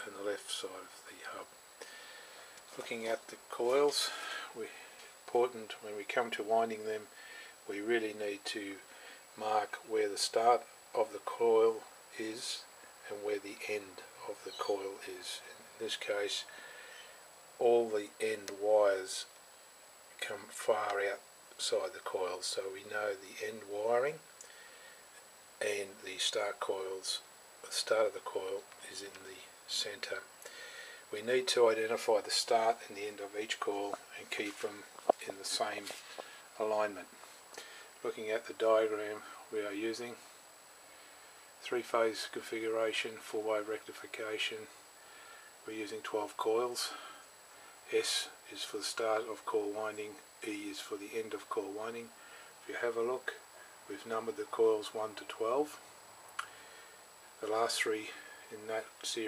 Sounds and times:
Speech: 0.0 - 1.5, 2.7 - 16.6, 17.6 - 19.4, 20.2 - 24.3, 25.6 - 30.3, 31.1 - 37.2, 38.0 - 40.3, 41.6 - 44.8, 45.6 - 47.2, 47.9 - 55.9, 57.4 - 59.2.

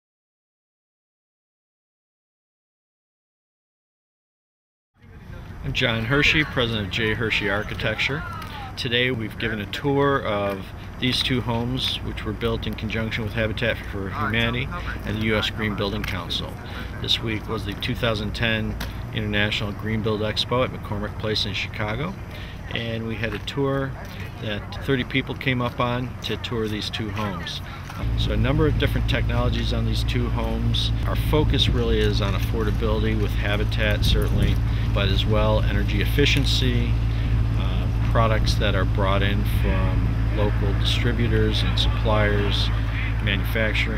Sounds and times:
Speech: 5.0 - 37.0, 37.6 - 43.9.

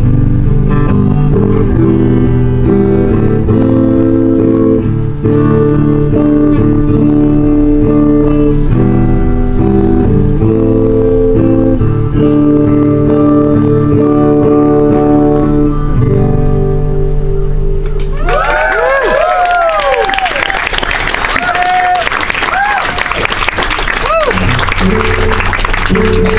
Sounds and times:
Music: 0.0 - 19.0, 23.4 - 26.3
Inside, public space: 0.0 - 26.3.

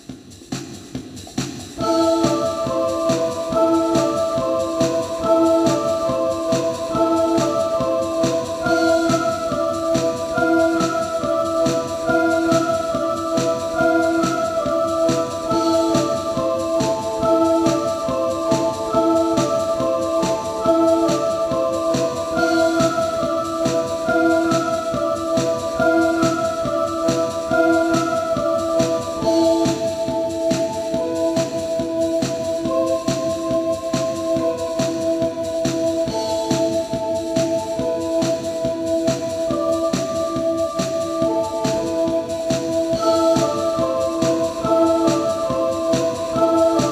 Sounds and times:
Techno: 0.0 - 46.9.

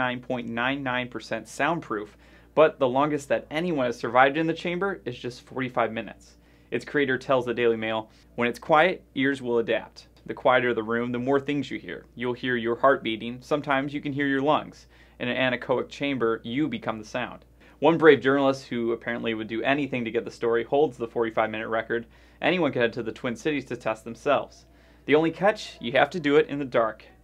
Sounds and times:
Speech: 0.0 - 27.2.

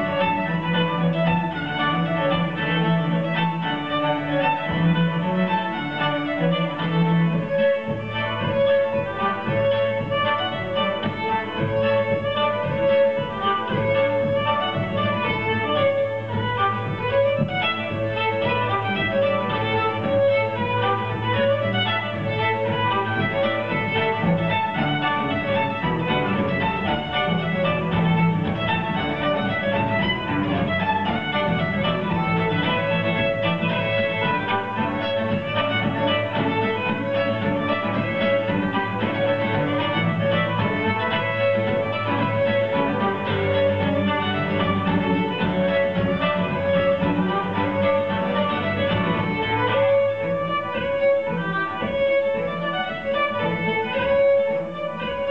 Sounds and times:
Cello: 0.0 - 55.3
String section: 0.0 - 55.3.

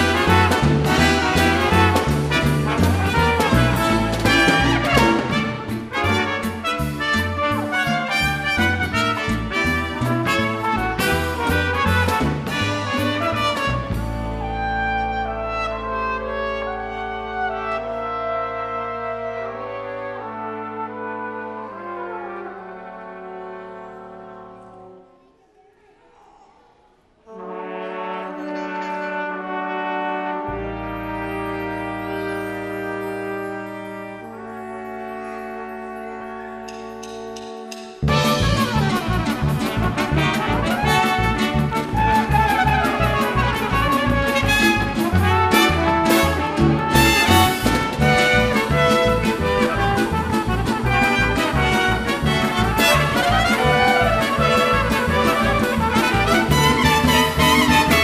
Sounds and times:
Bass drum: 0.0 - 7.2, 8.2 - 14.4, 38.0 - 58.0
Drum kit: 0.0 - 14.5, 36.7 - 58.0.

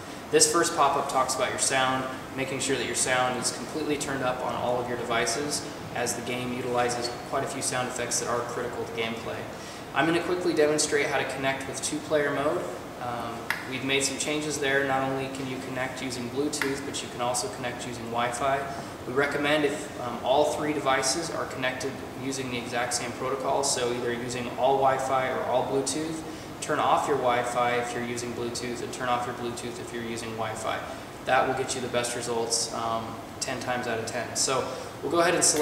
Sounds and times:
Speech: 0.3 - 35.6.

